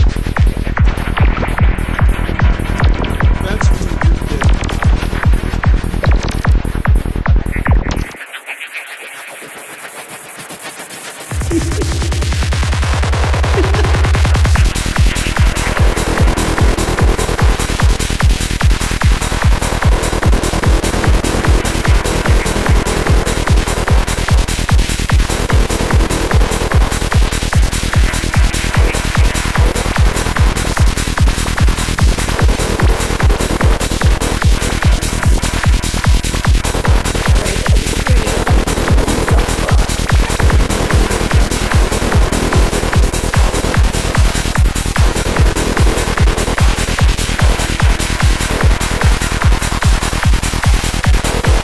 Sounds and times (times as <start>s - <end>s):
Trance music: 0.0s - 51.6s.